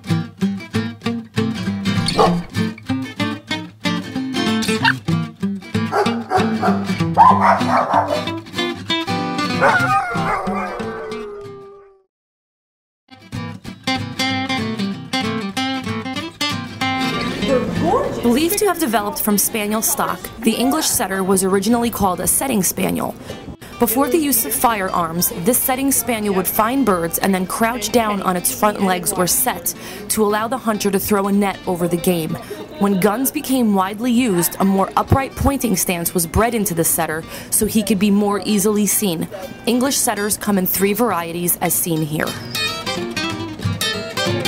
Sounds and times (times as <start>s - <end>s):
Music: 0.0s - 11.7s, 13.1s - 44.4s
Speech: 17.4s - 42.4s.